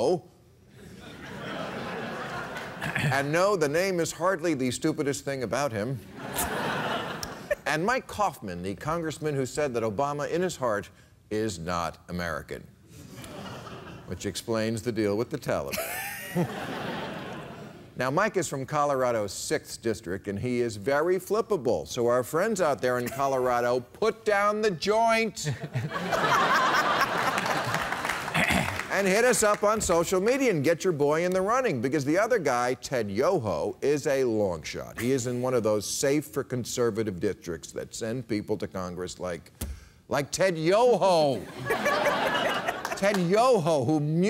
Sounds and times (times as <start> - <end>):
Speech: 3.1 - 6.0, 7.6 - 12.7, 14.1 - 15.7, 18.0 - 25.5, 28.9 - 39.5, 40.1 - 41.4, 42.9 - 44.3.